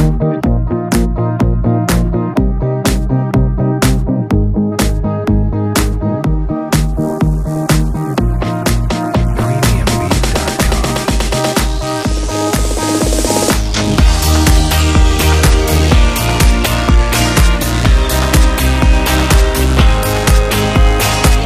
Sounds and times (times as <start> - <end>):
Music: 0.0 - 21.4.